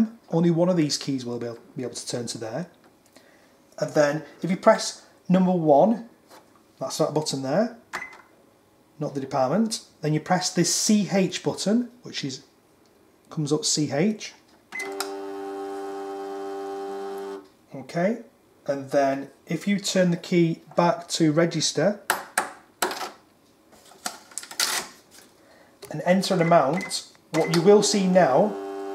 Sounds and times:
Speech: 0.0s - 2.8s, 3.8s - 6.1s, 6.8s - 7.8s, 9.0s - 12.5s, 13.3s - 14.4s, 17.7s - 22.1s, 25.8s - 28.6s.

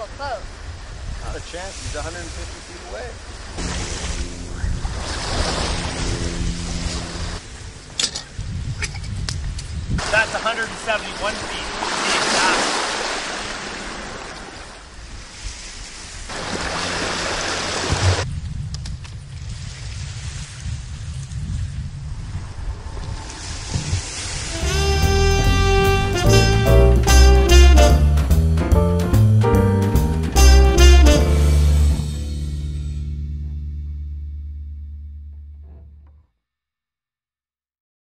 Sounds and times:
Music: 24.5s - 36.2s.

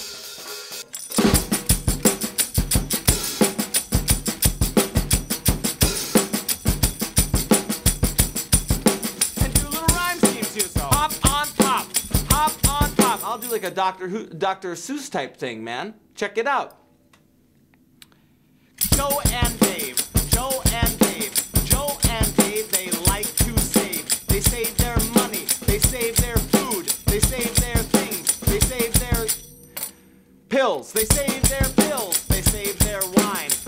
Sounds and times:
Drum: 0.0s - 13.6s, 18.8s - 29.6s, 31.0s - 33.6s.

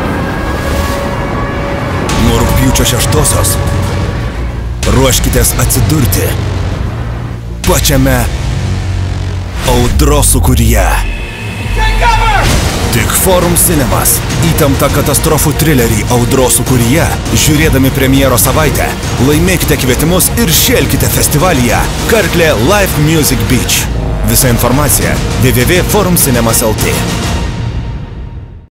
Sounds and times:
Soundtrack music: 0.0s - 28.7s
Speech: 2.1s - 3.6s, 4.8s - 6.4s, 7.6s - 8.3s, 9.6s - 11.1s, 11.8s - 27.1s.

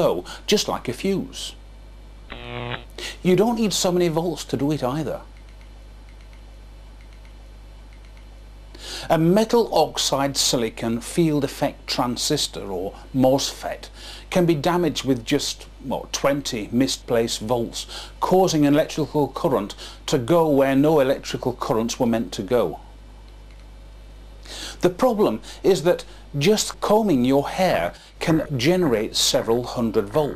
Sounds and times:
Speech: 0.0s - 1.6s, 3.1s - 5.3s, 9.1s - 22.9s, 24.8s - 30.3s.

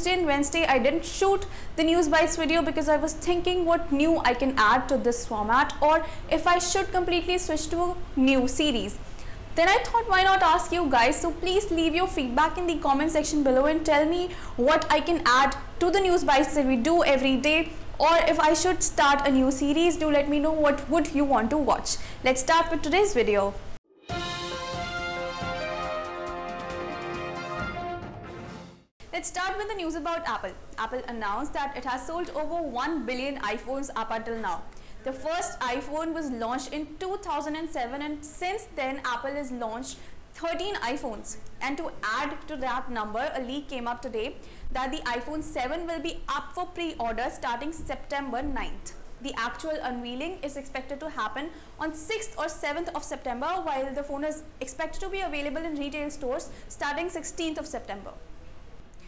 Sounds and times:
Speech: 0.0s - 9.0s, 9.6s - 23.6s, 29.1s - 58.2s.

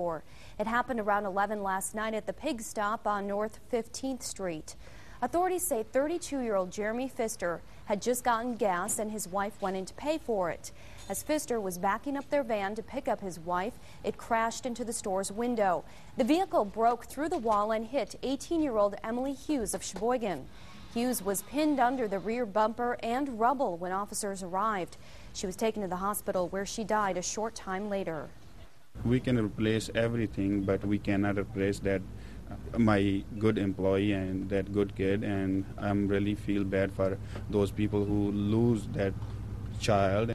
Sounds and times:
Speech: 29.0s - 39.2s, 39.8s - 40.3s.

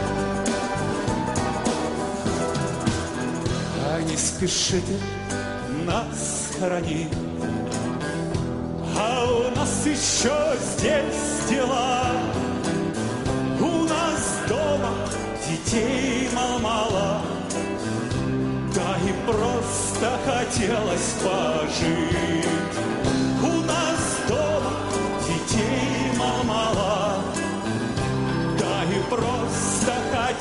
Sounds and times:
Acoustic guitar: 0.0s - 30.4s.

